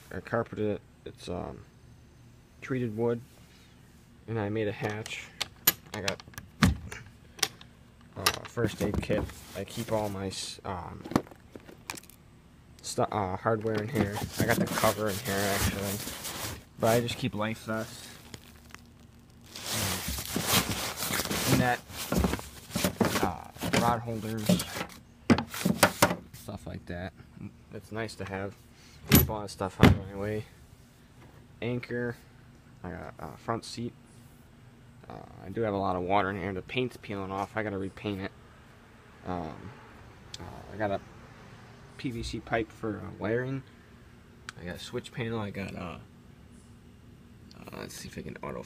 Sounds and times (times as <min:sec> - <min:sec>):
Speech: 0:00.0 - 0:01.7, 0:02.6 - 0:03.3, 0:04.3 - 0:05.4, 0:06.0 - 0:06.2, 0:08.2 - 0:11.1, 0:12.8 - 0:16.1, 0:16.8 - 0:18.2, 0:21.5 - 0:21.8, 0:23.1 - 0:24.8, 0:26.4 - 0:28.6, 0:29.2 - 0:30.6, 0:31.6 - 0:32.2, 0:32.8 - 0:34.0, 0:35.0 - 0:38.4, 0:39.2 - 0:39.8, 0:40.4 - 0:41.0, 0:42.0 - 0:43.7, 0:44.5 - 0:46.1, 0:47.5 - 0:48.6.